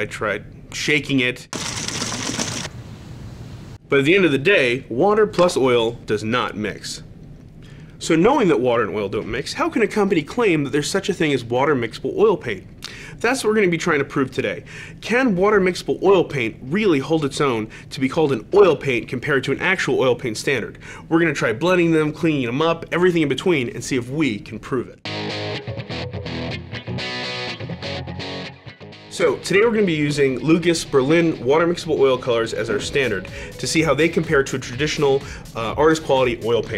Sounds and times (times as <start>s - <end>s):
Speech: 0.0s - 1.5s, 3.9s - 7.1s, 8.0s - 25.0s, 29.1s - 36.7s.